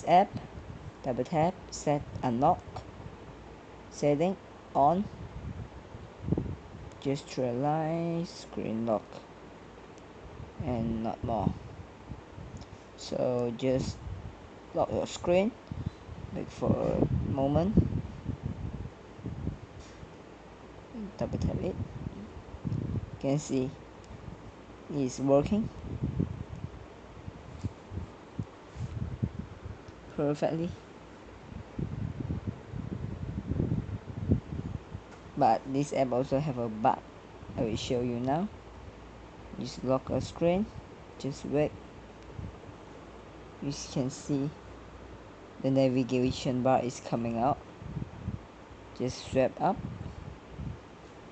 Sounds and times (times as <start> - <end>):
Speech: 0.0 - 0.4, 1.0 - 2.8, 3.9 - 5.1, 7.0 - 9.2, 10.6 - 11.6, 13.0 - 14.0, 14.8 - 15.6, 16.4 - 17.8, 21.0 - 21.8, 23.2 - 23.8, 24.9 - 25.7, 30.1 - 30.8, 35.4 - 37.0, 37.6 - 38.5, 39.6 - 41.8, 43.6 - 44.6, 45.6 - 47.6, 49.0 - 49.8.